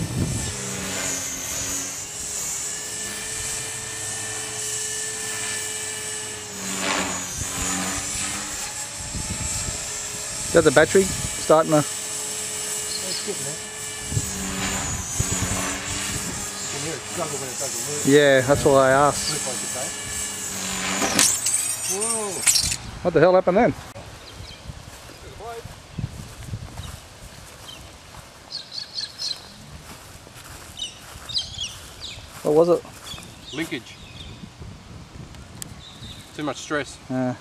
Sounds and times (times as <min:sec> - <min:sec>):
Outside, rural or natural: 0:00.0 - 0:37.4
Bird: 0:12.8 - 0:13.4, 0:28.5 - 0:29.6, 0:30.7 - 0:32.4.